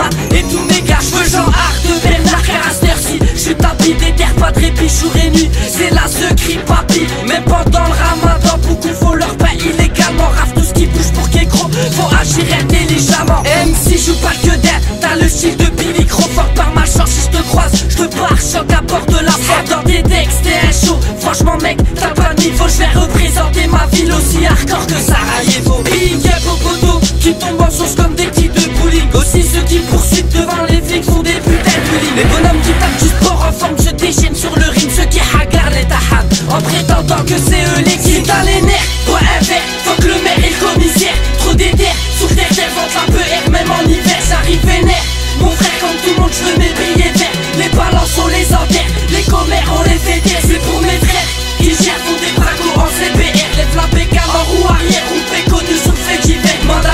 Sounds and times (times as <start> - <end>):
Music: 0.0 - 56.9.